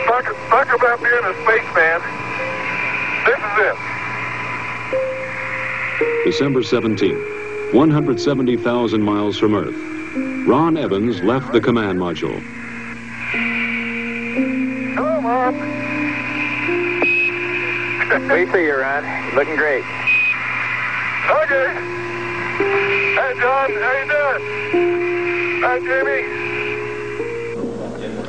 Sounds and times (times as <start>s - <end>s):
Music: 0.0s - 28.2s.